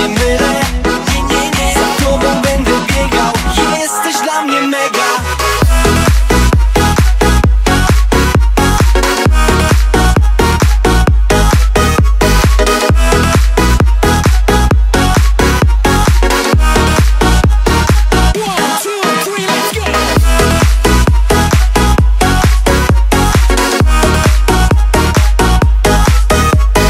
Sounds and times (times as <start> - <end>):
Music: 0.0 - 26.8.